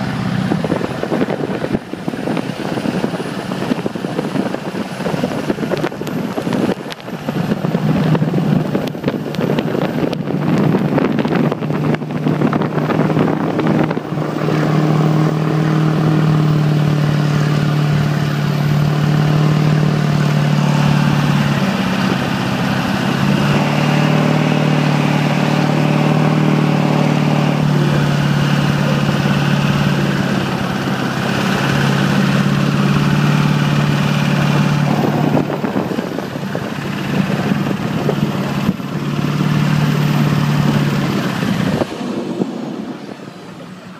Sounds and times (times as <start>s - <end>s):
Truck: 0.0s - 43.9s.